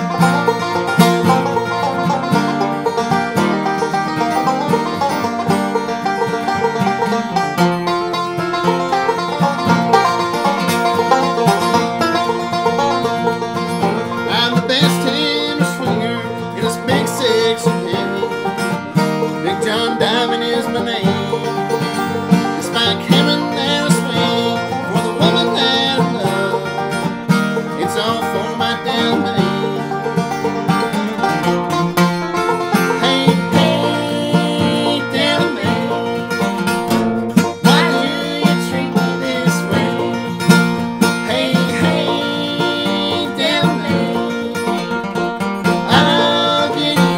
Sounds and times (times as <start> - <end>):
Banjo: 0.0 - 47.1
Bluegrass: 0.0 - 47.1
Guitar: 0.0 - 47.1.